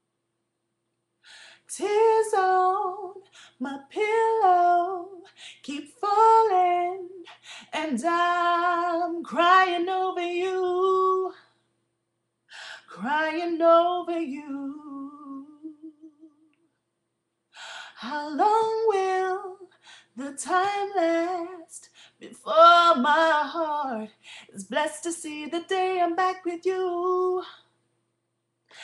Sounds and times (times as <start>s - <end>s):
Female singing: 1.7s - 11.5s, 12.8s - 16.5s, 17.9s - 27.7s.